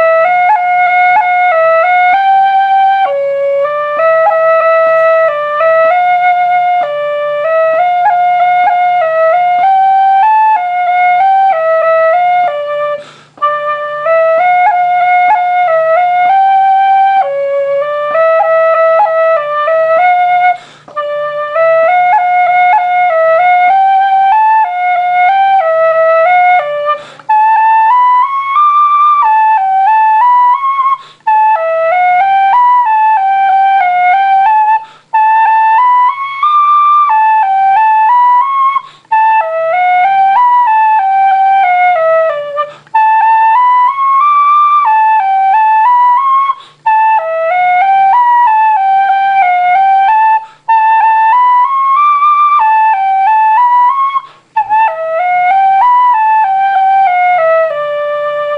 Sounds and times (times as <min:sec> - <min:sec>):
Flute: 0:00.0 - 0:58.5.